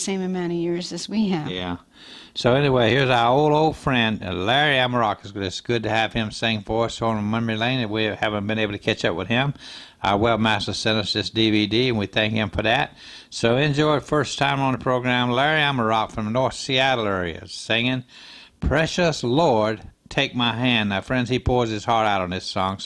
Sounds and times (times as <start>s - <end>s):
Speech: 0.0s - 1.8s, 2.4s - 18.0s, 18.6s - 22.8s.